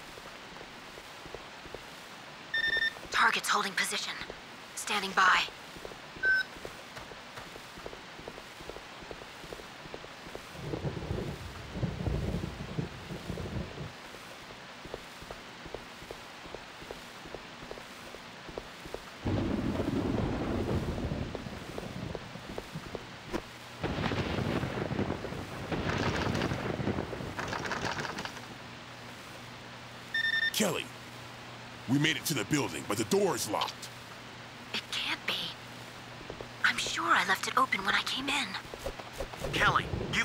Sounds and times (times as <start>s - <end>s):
Rain on surface: 0.0s - 30.2s, 30.8s - 40.2s.